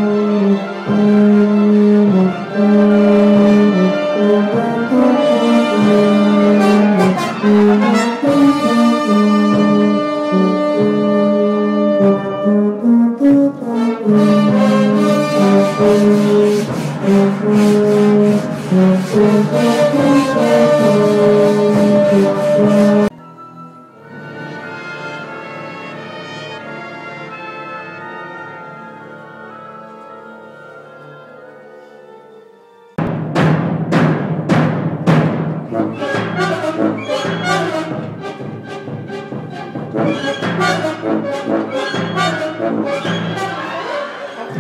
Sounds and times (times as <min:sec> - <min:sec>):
French horn: 0:00.0 - 0:33.0, 0:35.7 - 0:44.6
Orchestra: 0:00.0 - 0:44.6.